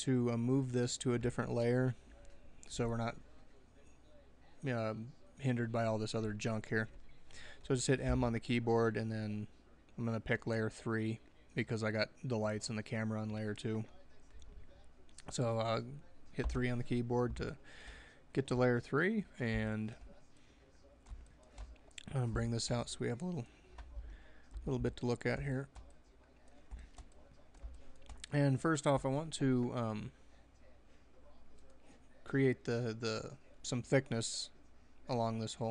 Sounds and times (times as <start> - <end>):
Speech: 0.0 - 17.7, 18.3 - 35.7.